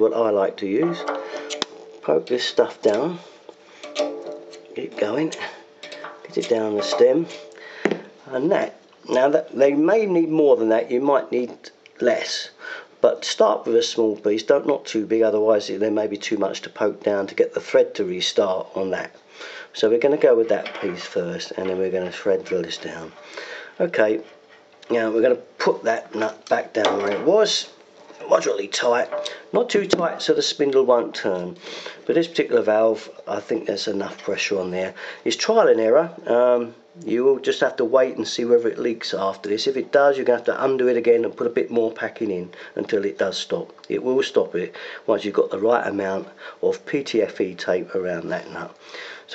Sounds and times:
Speech: 0.0s - 3.3s, 4.7s - 7.5s, 8.2s - 23.2s, 23.8s - 49.3s
Inside, small room: 0.0s - 49.3s.

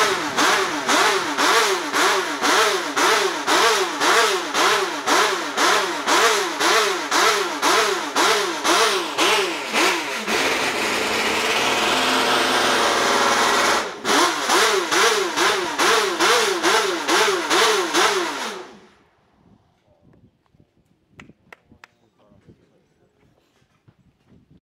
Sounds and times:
Idling: 0.0s - 17.6s
Accelerating, revving, vroom: 0.0s - 18.8s
Medium engine (mid frequency): 0.0s - 19.9s
Vehicle: 0.0s - 21.0s.

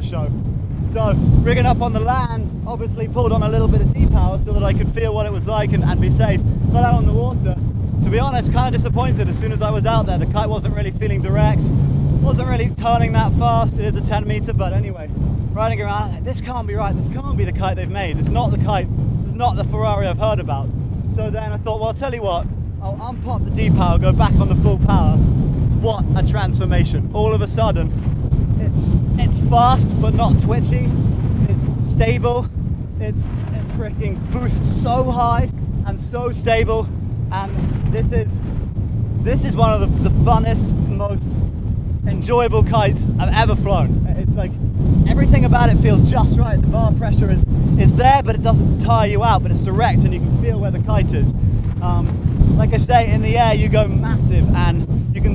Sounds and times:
Speech: 0.0s - 0.3s, 0.9s - 25.2s, 25.8s - 27.9s, 28.6s - 38.4s, 39.2s - 41.2s, 42.1s - 55.3s.

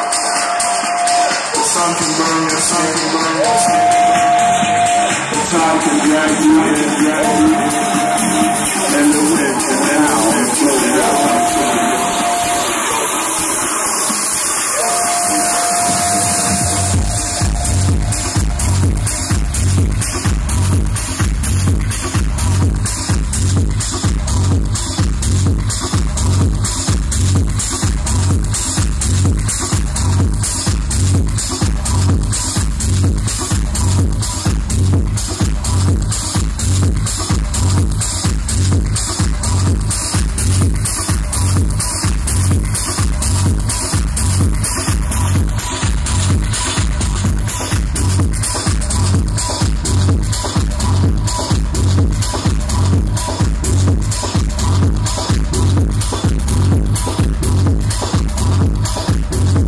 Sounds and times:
Disco: 0.0s - 59.6s.

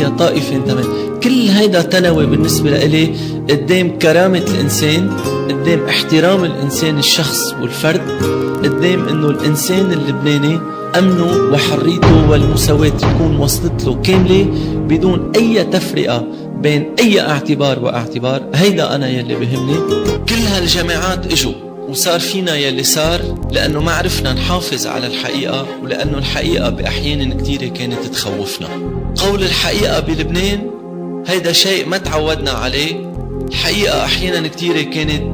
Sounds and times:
Male speech, man speaking: 0.0s - 35.3s
Music: 0.0s - 35.3s
Narration, monologue: 0.0s - 35.3s.

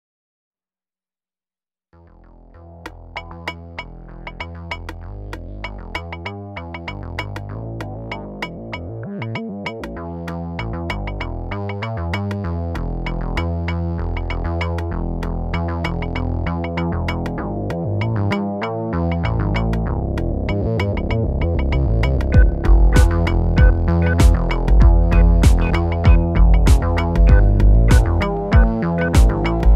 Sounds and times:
Synthesizer: 2.3s - 29.7s.

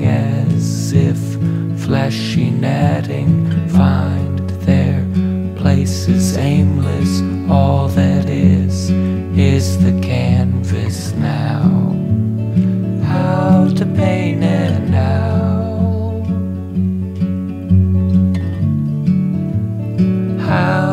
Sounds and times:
Music: 0.0s - 20.9s.

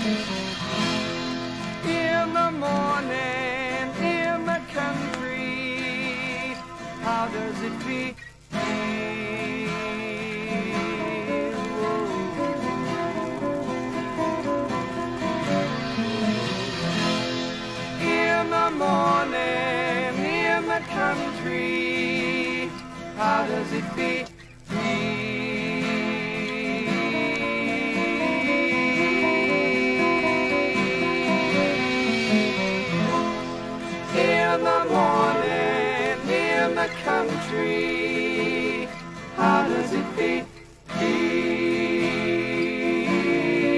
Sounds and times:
Country: 0.0s - 43.7s.

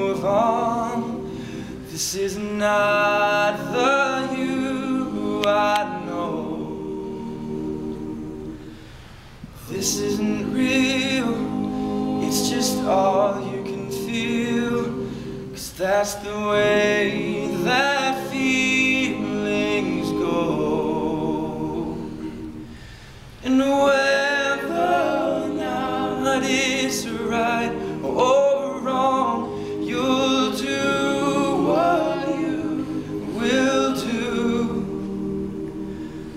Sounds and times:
Music: 3.0s - 8.8s, 9.8s - 15.6s, 16.6s - 22.8s, 24.2s - 36.3s.

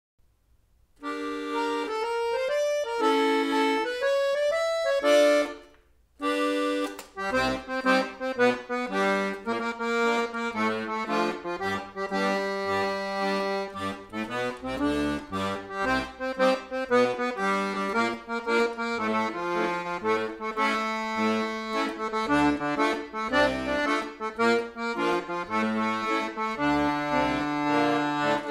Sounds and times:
Accordion: 1.0s - 28.5s.

